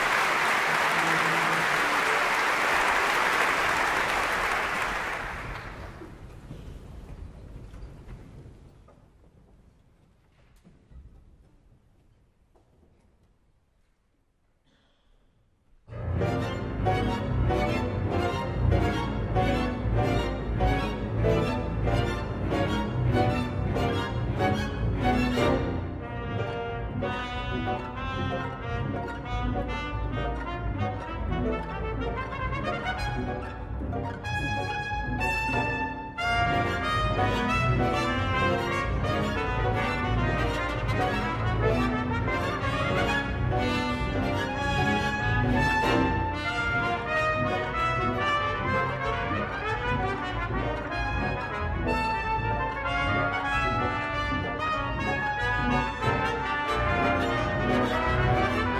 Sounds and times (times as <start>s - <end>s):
Orchestra: 0.0s - 8.6s, 15.8s - 58.7s.